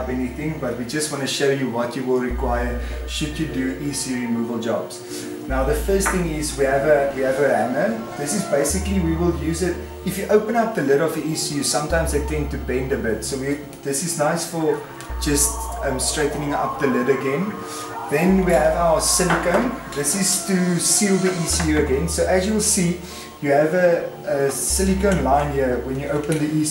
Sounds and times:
Music: 0.0 - 26.7
Speech: 0.0 - 26.7.

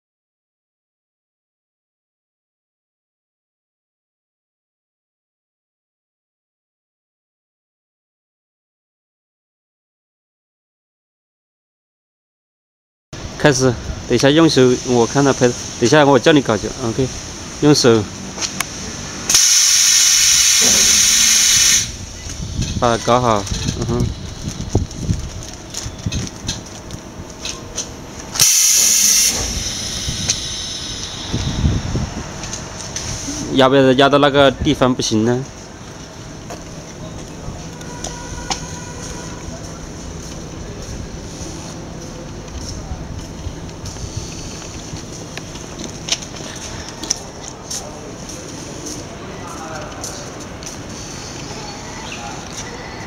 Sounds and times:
Speech: 13.4 - 18.1, 20.6 - 21.0, 22.8 - 24.1, 33.3 - 35.5, 39.2 - 43.5, 46.6 - 50.4, 51.5 - 52.9.

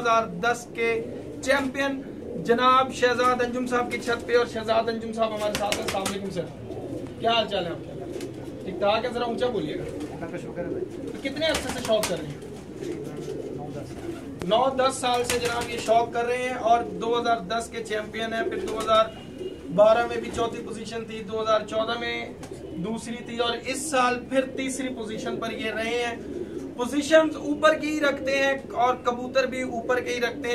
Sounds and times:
Speech: 0.0 - 6.6, 7.2 - 7.9, 8.6 - 12.4, 13.1 - 26.2, 26.8 - 30.5
Pigeon, dove: 5.3 - 16.1, 18.2 - 20.6, 24.5 - 30.5.

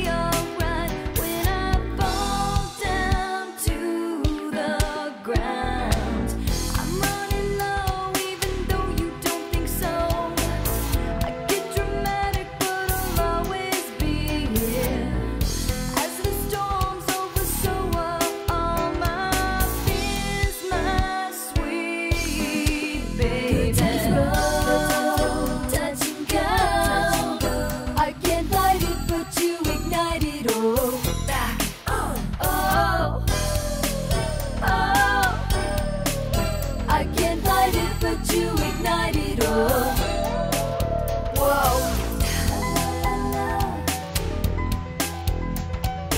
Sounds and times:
Music: 0.0 - 46.1.

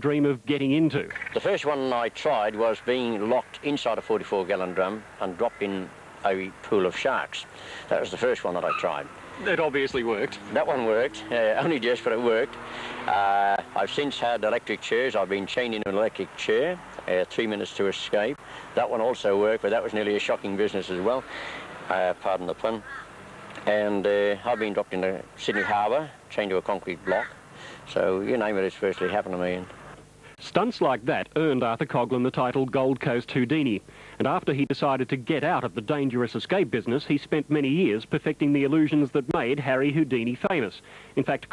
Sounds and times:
Speech: 0.0 - 21.3, 21.9 - 22.9, 23.6 - 27.3, 27.9 - 29.7, 30.4 - 41.5
Vehicle: 1.1 - 30.4.

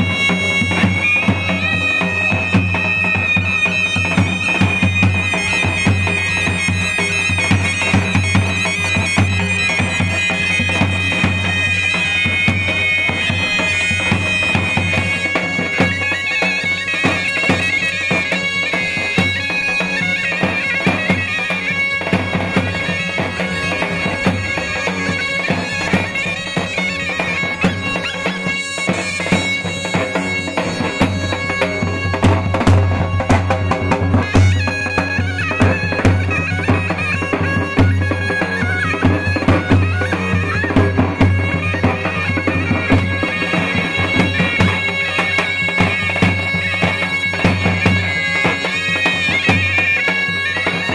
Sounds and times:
Bagpipes: 0.0 - 50.9.

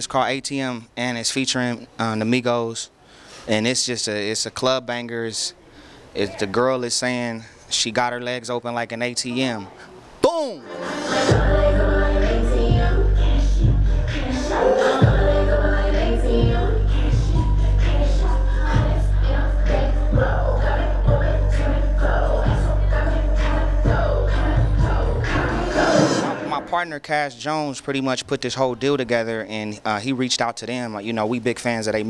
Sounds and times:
Music: 10.6 - 26.4.

